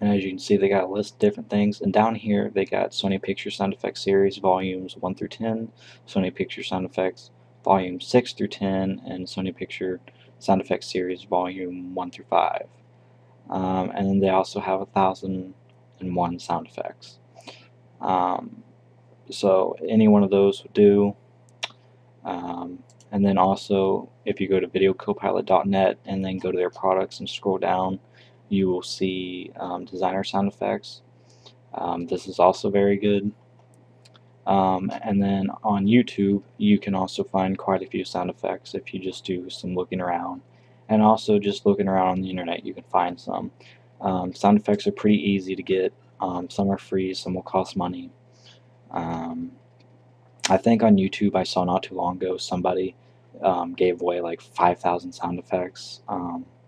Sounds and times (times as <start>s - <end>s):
Speech: 0.0s - 12.7s, 13.5s - 17.2s, 18.0s - 18.6s, 19.3s - 21.2s, 22.3s - 31.0s, 31.8s - 33.4s, 34.5s - 48.2s, 48.9s - 49.6s, 50.4s - 56.5s.